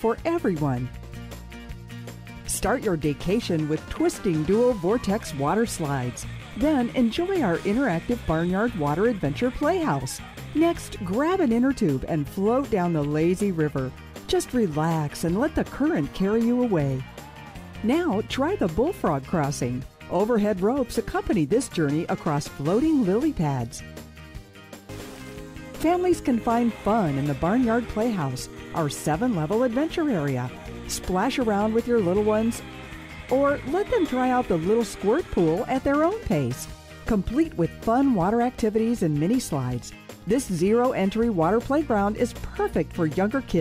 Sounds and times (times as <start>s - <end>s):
Speech: 0.0s - 0.9s, 2.5s - 17.0s, 17.8s - 23.8s, 25.8s - 32.6s, 33.3s - 43.6s
Music: 0.0s - 43.6s.